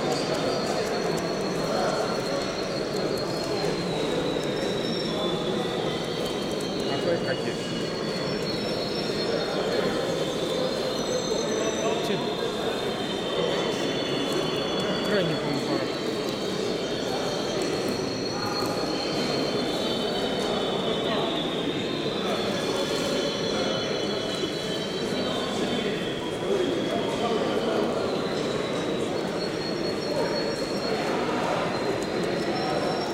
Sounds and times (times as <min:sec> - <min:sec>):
Speech: 0:00.0 - 0:33.1.